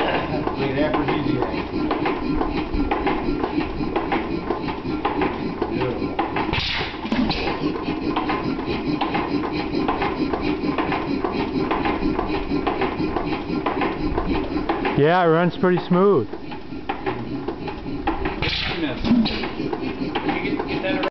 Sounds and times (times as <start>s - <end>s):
Speech: 0.6s - 1.6s, 15.0s - 16.3s.